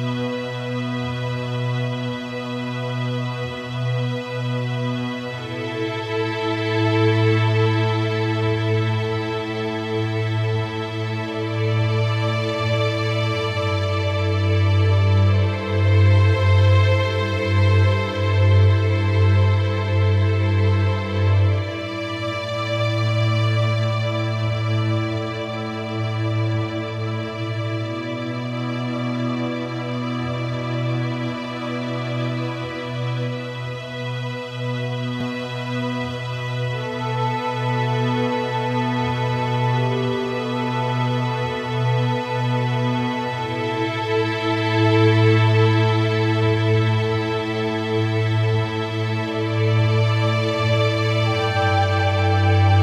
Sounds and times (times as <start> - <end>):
Music: 0.0 - 52.8.